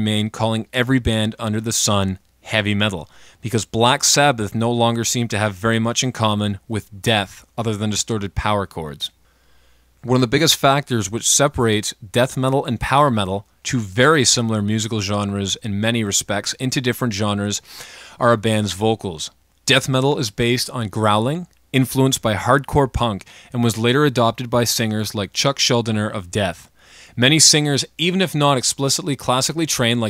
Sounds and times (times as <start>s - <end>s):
Speech: 0.0s - 9.2s, 10.0s - 17.6s, 18.2s - 30.1s.